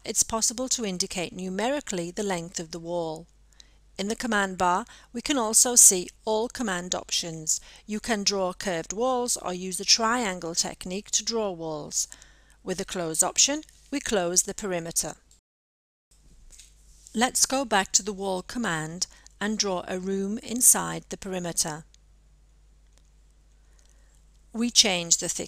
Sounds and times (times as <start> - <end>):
Speech: 0.0 - 3.2, 4.0 - 12.1, 12.7 - 15.2, 17.2 - 21.8, 24.6 - 25.4.